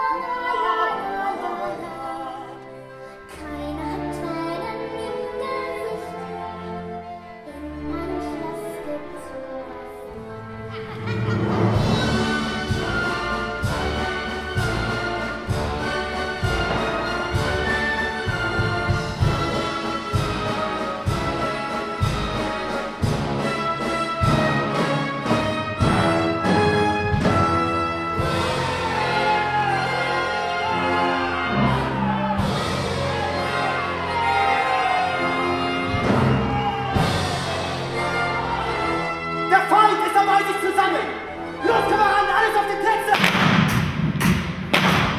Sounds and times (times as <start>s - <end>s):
Classical music: 0.0s - 43.5s
Speech: 39.5s - 43.2s.